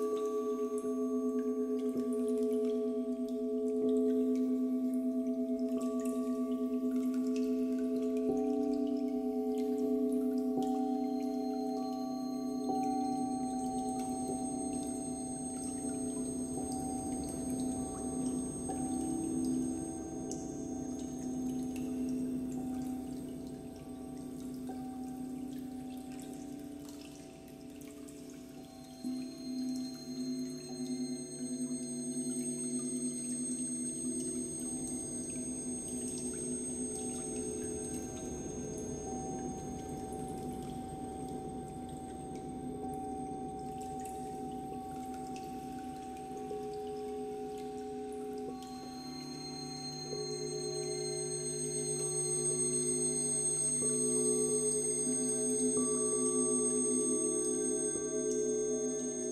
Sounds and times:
New-age music: 0.0 - 59.3.

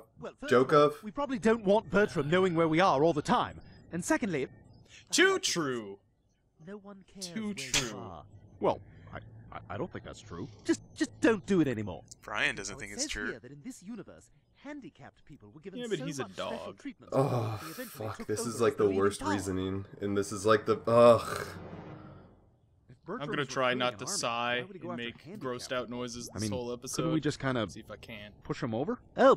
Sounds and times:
Speech: 0.0 - 6.0, 6.7 - 8.8, 9.5 - 21.6, 23.0 - 29.3.

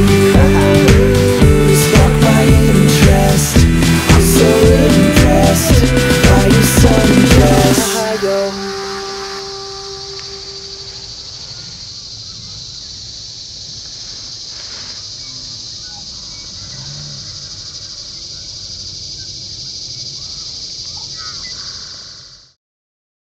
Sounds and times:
Outside, rural or natural: 0.0 - 22.6.

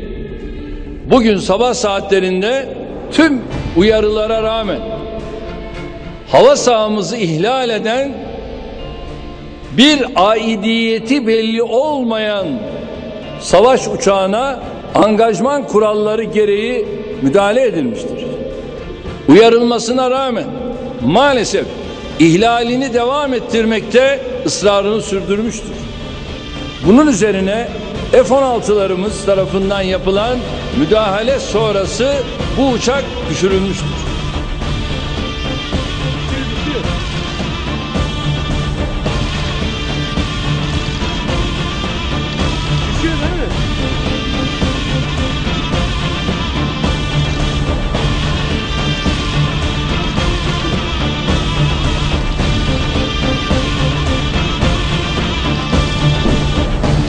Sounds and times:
Music: 0.0 - 57.0
Speech: 1.1 - 5.0, 6.3 - 8.2, 9.7 - 12.7, 13.4 - 18.4, 19.3 - 25.8, 26.8 - 34.1, 42.9 - 43.6.

